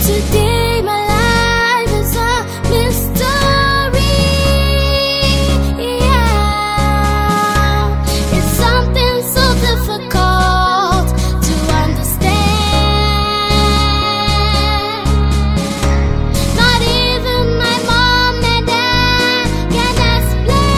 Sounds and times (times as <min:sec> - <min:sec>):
Music: 0:00.0 - 0:20.7.